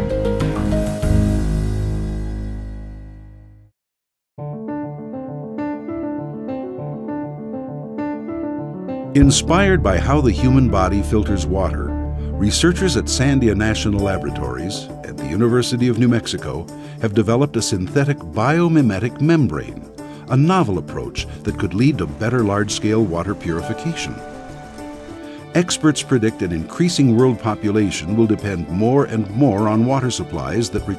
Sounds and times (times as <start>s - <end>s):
Music: 0.0s - 3.7s, 4.4s - 30.9s
Speech: 9.2s - 24.2s, 25.5s - 30.9s.